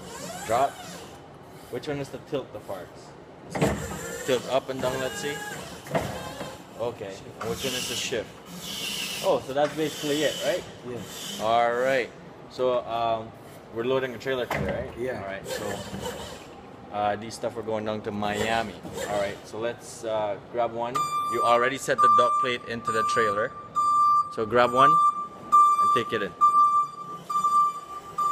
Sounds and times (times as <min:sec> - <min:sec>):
Vehicle: 0:00.0 - 0:28.3
Speech: 0:06.8 - 0:08.3, 0:25.8 - 0:26.4.